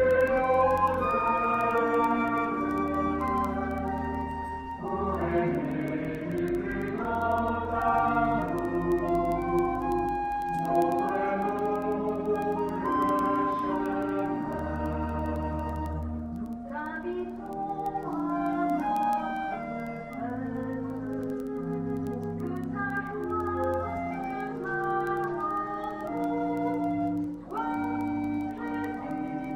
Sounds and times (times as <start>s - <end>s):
Music: 0.0s - 29.5s.